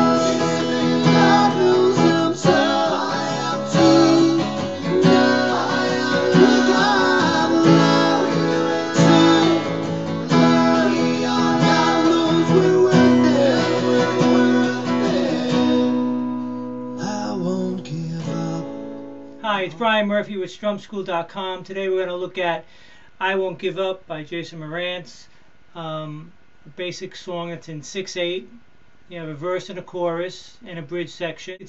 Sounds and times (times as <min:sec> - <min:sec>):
Strum: 0:00.0 - 0:19.4
Acoustic guitar: 0:00.0 - 0:23.8
Speech: 0:19.4 - 0:31.6.